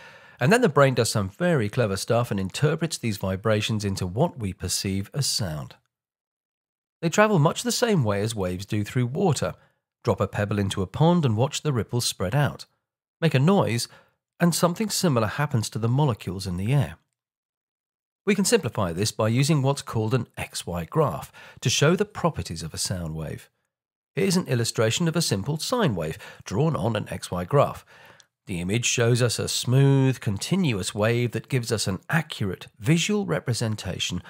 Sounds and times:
Speech: 0.4s - 5.8s, 7.0s - 17.1s, 18.3s - 23.6s, 24.2s - 27.9s, 28.5s - 34.2s.

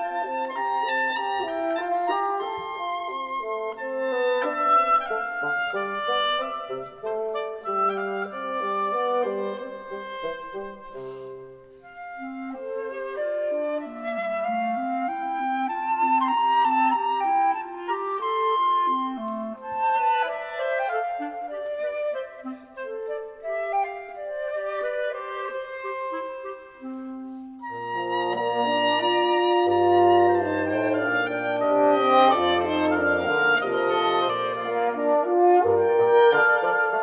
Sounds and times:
Music: 0.0s - 37.0s.

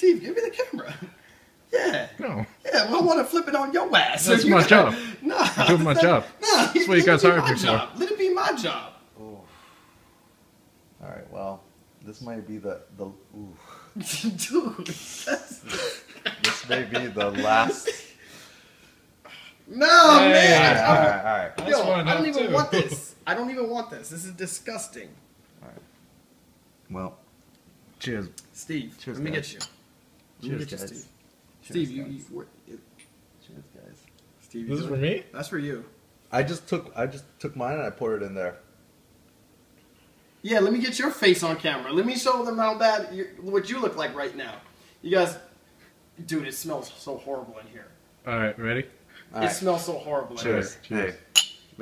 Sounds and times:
Inside, small room: 0.0s - 51.8s.

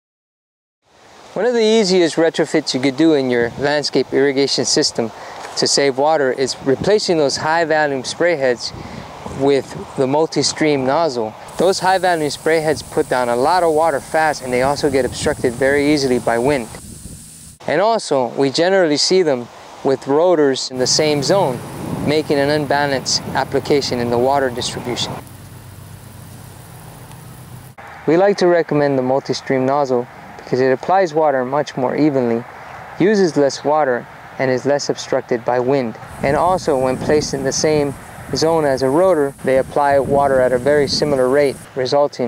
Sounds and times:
Speech: 1.4s - 8.8s, 9.4s - 16.8s, 17.6s - 25.2s, 28.1s - 42.2s
Spray: 11.4s - 17.6s, 20.8s - 27.8s, 36.1s - 41.7s.

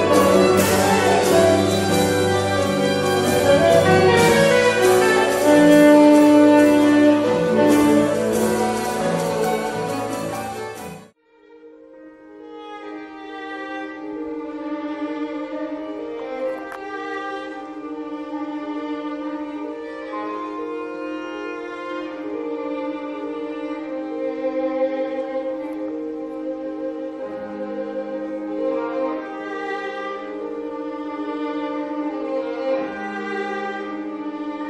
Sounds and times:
Orchestra: 0.0s - 34.6s.

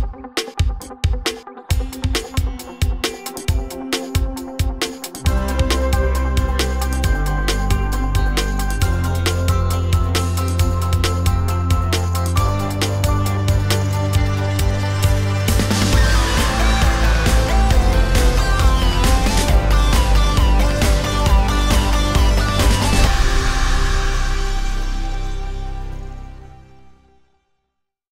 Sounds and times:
Music: 0.0s - 27.8s.

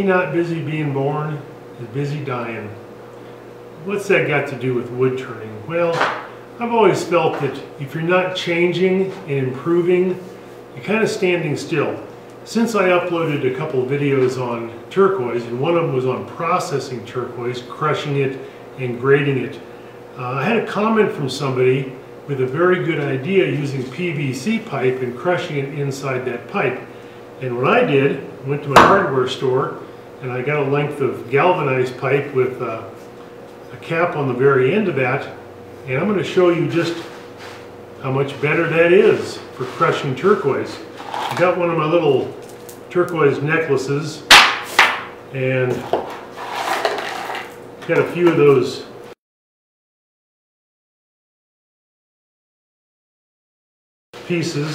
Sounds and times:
Speech: 0.0s - 2.8s, 3.8s - 33.0s, 33.7s - 37.2s, 38.0s - 44.3s, 45.3s - 46.0s, 47.8s - 49.0s, 54.2s - 54.7s.

